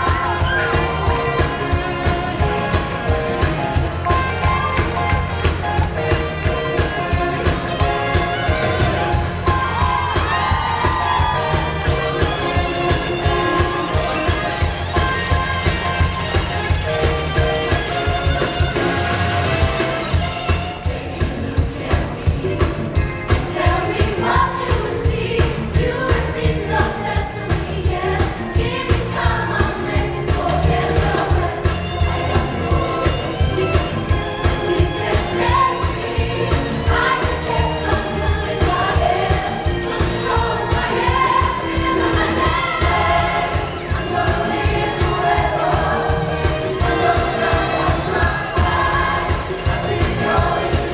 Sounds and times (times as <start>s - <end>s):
Music: 0.0s - 50.9s.